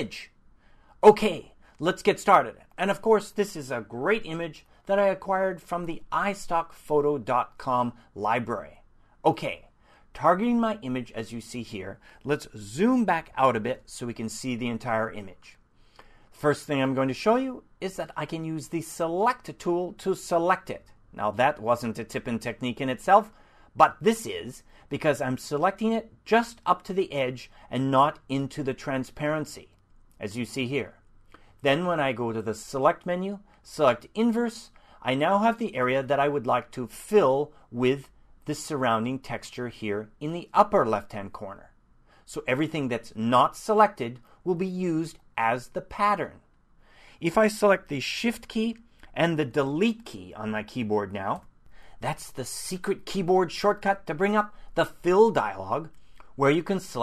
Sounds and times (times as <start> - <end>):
Speech: 0.0 - 0.4, 1.0 - 15.6, 16.4 - 31.0, 31.6 - 46.4, 47.2 - 51.4, 52.0 - 57.0.